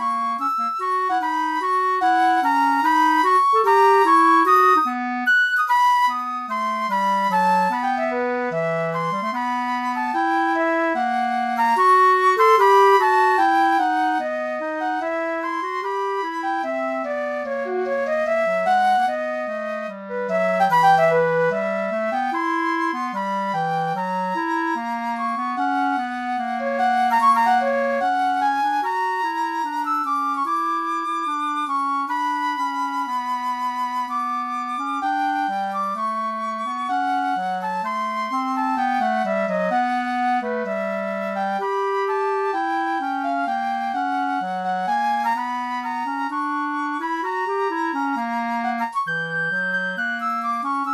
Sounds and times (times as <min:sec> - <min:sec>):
Wind instrument, woodwind instrument: 0:00.0 - 0:50.9.